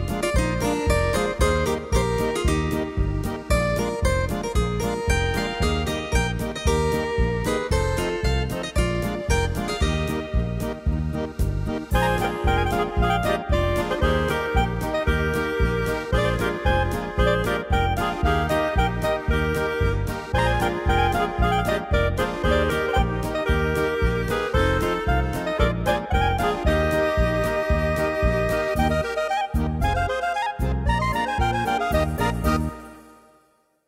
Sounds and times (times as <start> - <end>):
Music: 0.0 - 33.8.